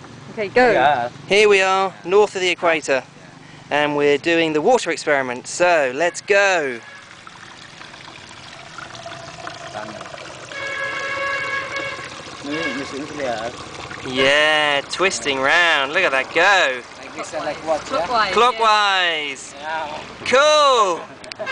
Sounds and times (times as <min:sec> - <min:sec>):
Stream: 0:03.8 - 0:21.5
Gurgling: 0:06.8 - 0:18.1.